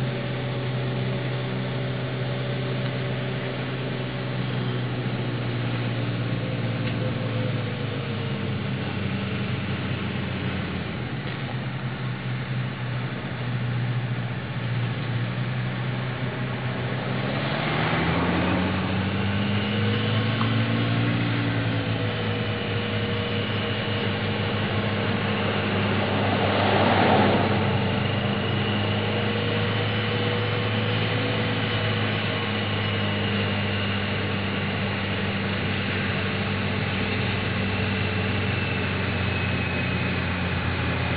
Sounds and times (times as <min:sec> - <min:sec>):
Vehicle: 0:00.0 - 0:41.1.